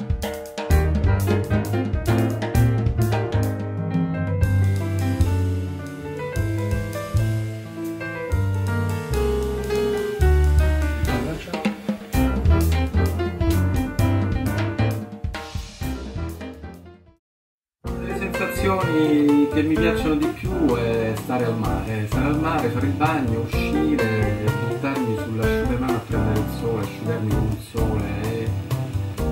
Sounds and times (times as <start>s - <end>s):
Music: 0.0s - 17.2s, 17.8s - 29.3s
Male speech, man speaking: 11.0s - 11.8s, 18.0s - 28.6s.